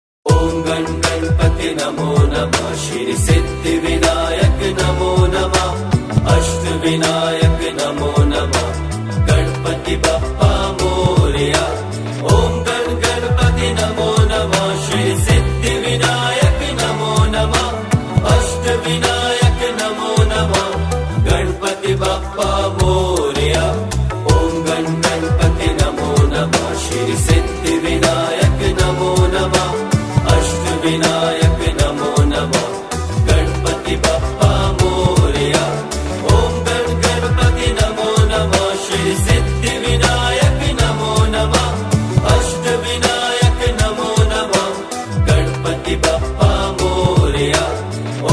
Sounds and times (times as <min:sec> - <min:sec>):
Mantra: 0:00.3 - 0:48.3.